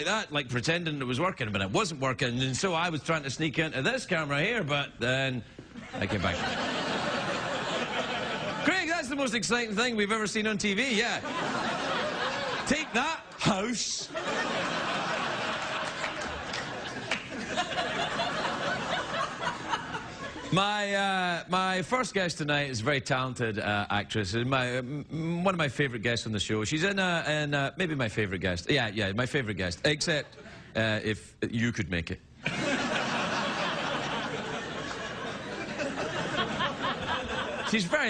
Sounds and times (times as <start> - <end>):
Speech: 0.0 - 5.4, 6.0 - 6.5, 8.6 - 11.2, 12.7 - 14.2, 20.5 - 32.2, 37.7 - 38.1.